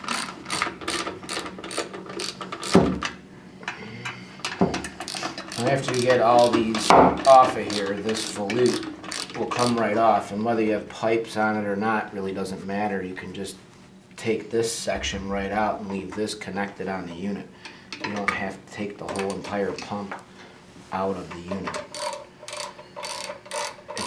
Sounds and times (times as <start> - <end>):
Speech: 5.6 - 8.8, 9.4 - 13.6, 14.2 - 20.2, 20.9 - 21.8.